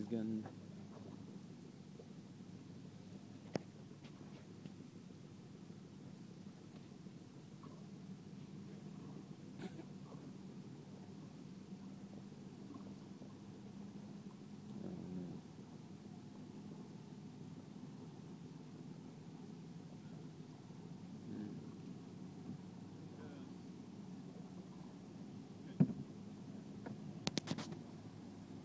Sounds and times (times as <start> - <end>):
Boat, Water vehicle: 0.0 - 28.6.